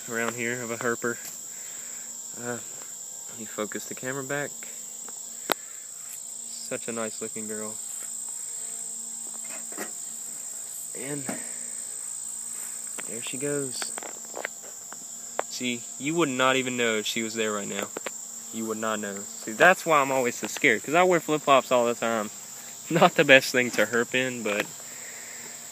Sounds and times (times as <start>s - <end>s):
Outside, rural or natural: 0.0s - 25.7s
Speech: 0.1s - 1.2s, 3.3s - 4.7s, 6.5s - 7.8s, 11.0s - 11.4s, 13.1s - 14.0s, 15.5s - 18.0s, 18.6s - 24.7s.